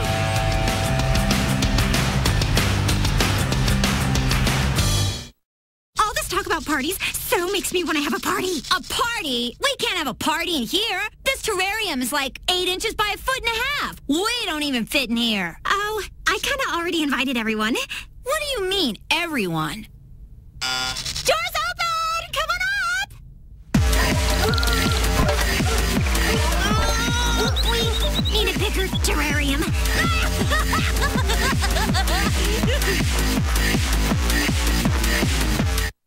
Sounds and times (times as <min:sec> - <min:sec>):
Speech: 0:06.0 - 0:19.9, 0:21.3 - 0:23.2, 0:26.6 - 0:30.4.